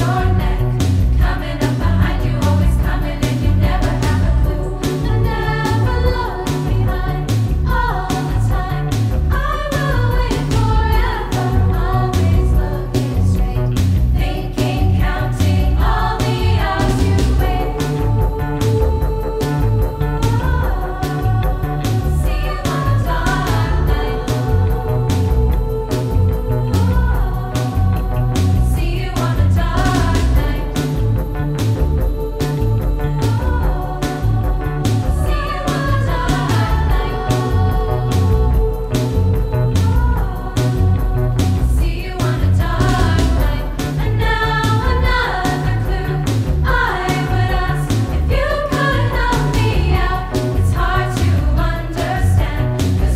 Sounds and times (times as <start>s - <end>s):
Music: 0.0s - 53.1s.